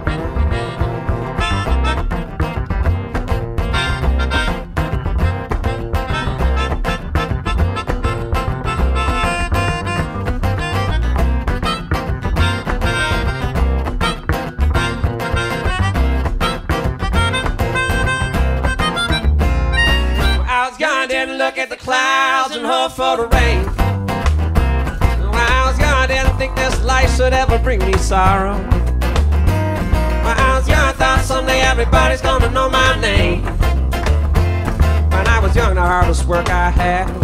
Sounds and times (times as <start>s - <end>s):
Music: 0.0s - 20.7s, 23.3s - 37.2s.